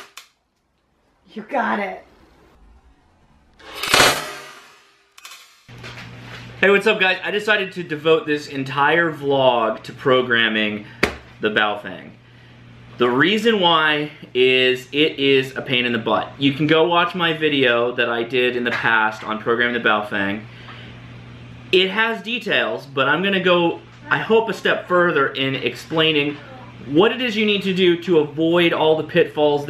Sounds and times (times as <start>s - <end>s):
Speech: 1.3s - 2.0s, 6.6s - 12.2s, 21.8s - 29.7s.